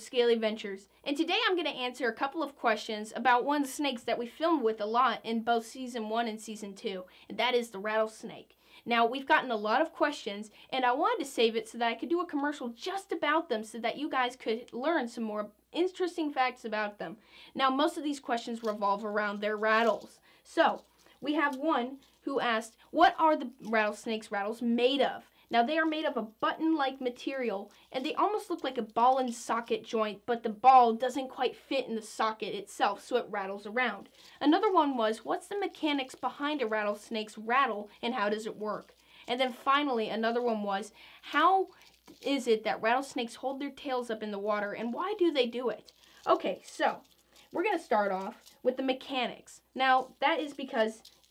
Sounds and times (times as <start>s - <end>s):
Speech: 0.0s - 47.0s, 47.6s - 51.0s.